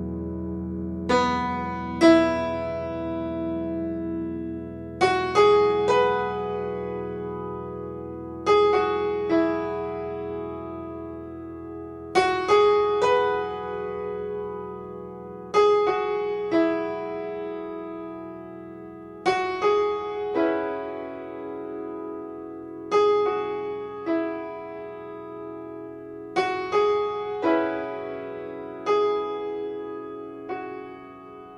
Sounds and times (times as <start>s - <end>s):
Piano: 0.0s - 31.5s.